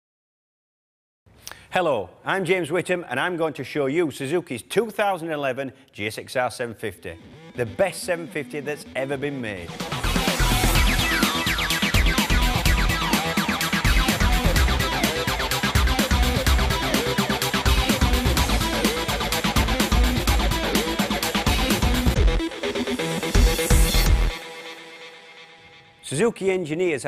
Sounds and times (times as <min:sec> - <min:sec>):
Speech: 0:01.7 - 0:09.7, 0:26.0 - 0:27.0
Music: 0:06.6 - 0:27.0.